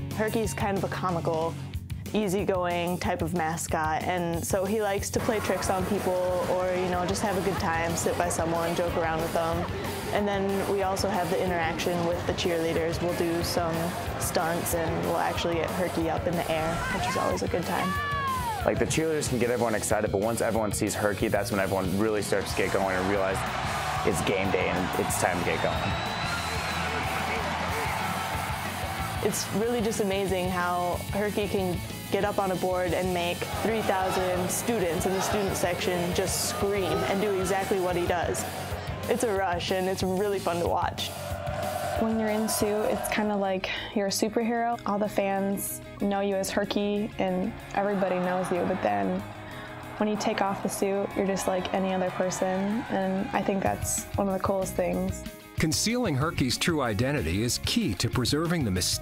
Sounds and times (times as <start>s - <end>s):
Music: 0.0s - 59.0s.